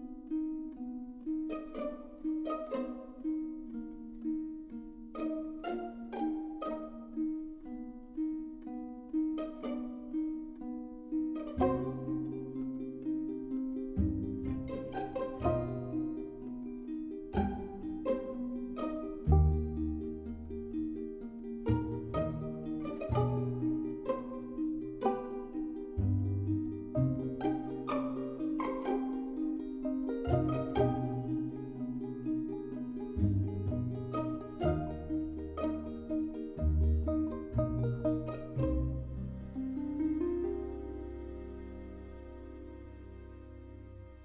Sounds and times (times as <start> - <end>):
Music: 0.0 - 44.2.